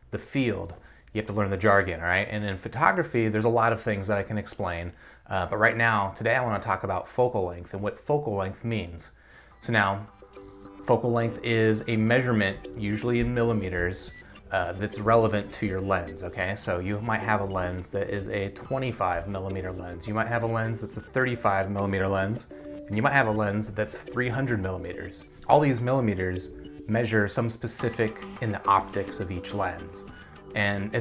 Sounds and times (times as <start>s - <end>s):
Speech: 0.0s - 10.1s, 10.8s - 31.0s.